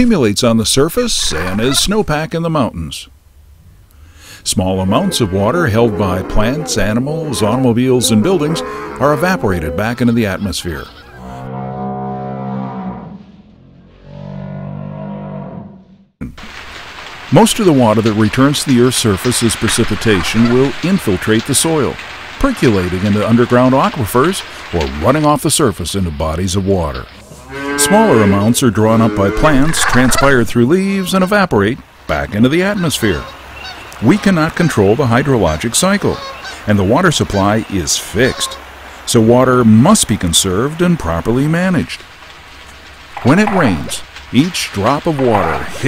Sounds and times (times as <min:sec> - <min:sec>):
Speech: 0:00.0 - 0:03.1, 0:04.4 - 0:11.0, 0:17.3 - 0:27.1, 0:27.8 - 0:33.3, 0:34.0 - 0:42.0, 0:43.2 - 0:45.8.